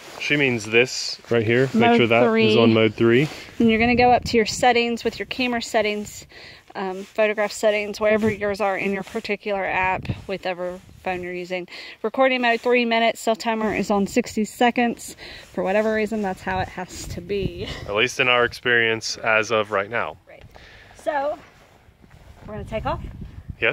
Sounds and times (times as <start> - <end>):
Speech: 0.2 - 6.2, 6.8 - 20.1.